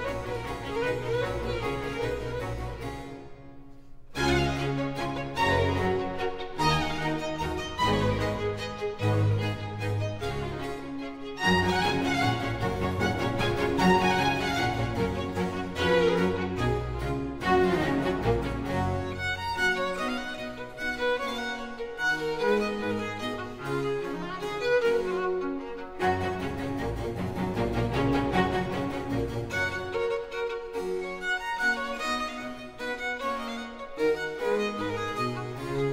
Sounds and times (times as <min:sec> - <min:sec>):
Violin, fiddle: 0:00.0 - 0:35.9.